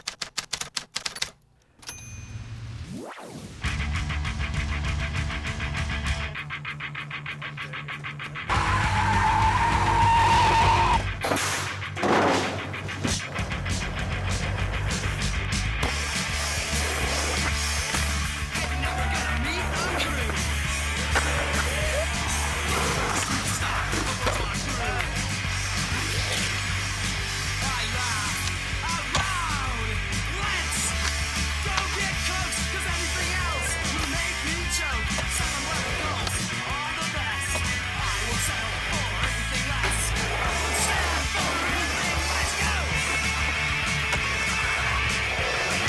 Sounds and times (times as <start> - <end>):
Skateboard: 9.4 - 29.6, 30.8 - 45.8.